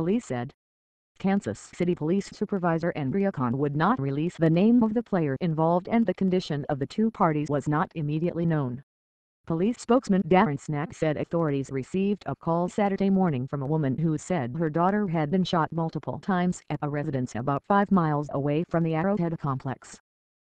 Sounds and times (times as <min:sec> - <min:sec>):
Speech: 0:00.0 - 0:00.6, 0:01.2 - 0:08.8, 0:09.5 - 0:20.0.